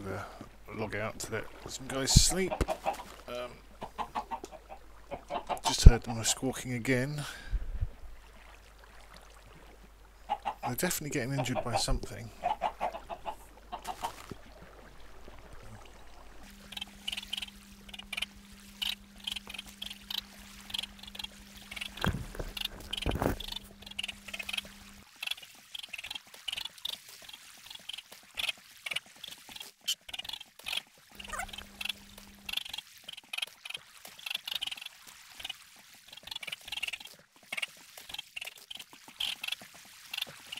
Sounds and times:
Speech: 0.0 - 2.6, 5.6 - 7.4, 10.6 - 12.3
Chicken, rooster: 2.4 - 3.2, 3.8 - 6.0, 10.3 - 10.7, 12.4 - 14.3, 31.2 - 32.6.

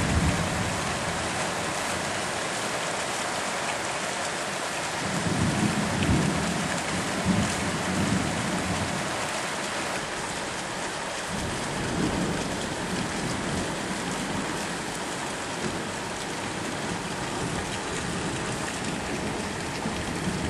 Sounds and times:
Raindrop: 0.0 - 20.4.

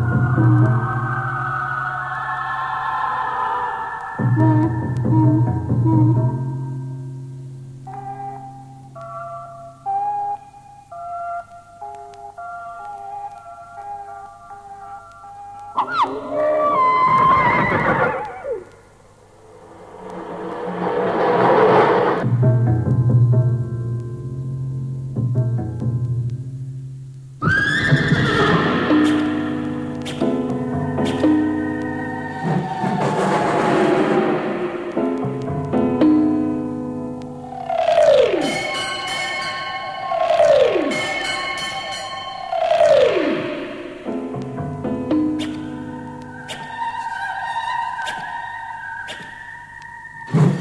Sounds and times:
Neigh, whinny: 16.3 - 18.6.

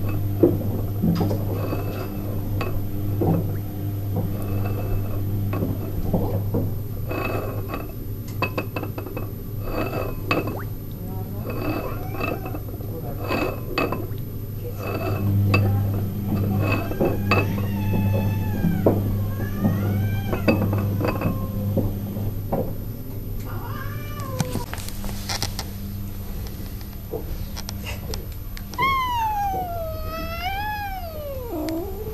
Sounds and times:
Speech: 10.9 - 17.8.

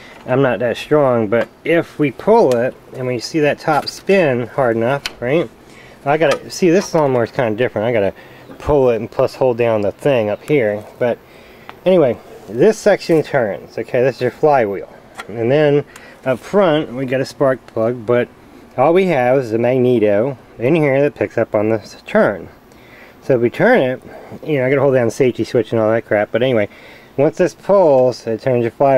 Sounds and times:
Speech: 0.3 - 11.2, 11.8 - 22.6, 23.2 - 28.9.

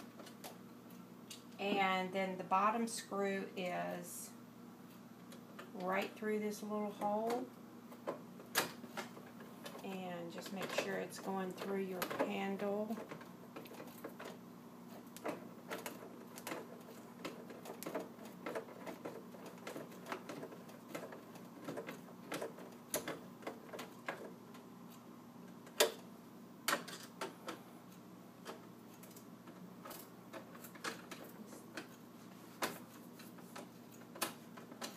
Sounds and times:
Speech: 1.6 - 4.4, 5.8 - 7.5, 9.8 - 13.0.

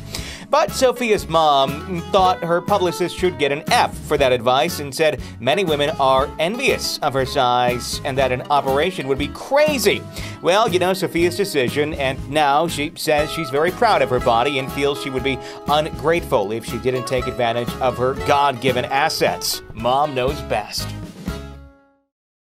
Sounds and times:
Music: 0.0 - 22.1
Speech: 0.5 - 21.0.

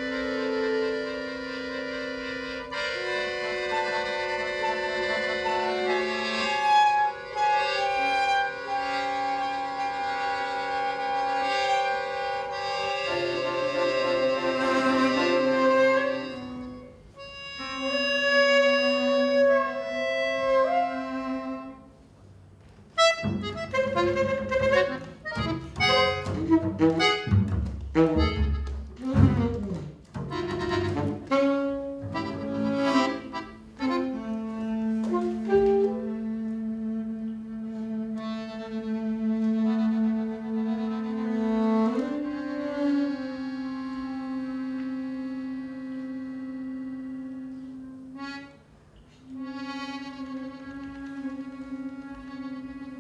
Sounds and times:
Cello: 0.0 - 22.0, 23.0 - 53.0
Saxophone: 0.0 - 22.0, 23.0 - 53.0
Accordion: 0.0 - 53.0
Double bass: 0.0 - 53.0.

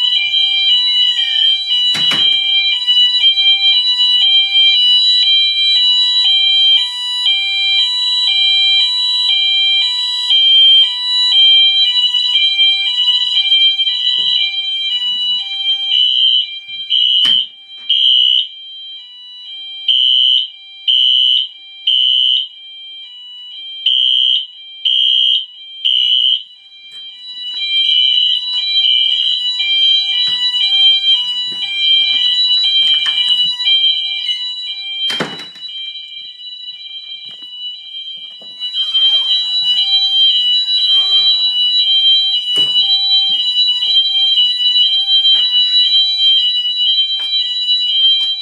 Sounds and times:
Fire alarm: 0.0 - 48.4.

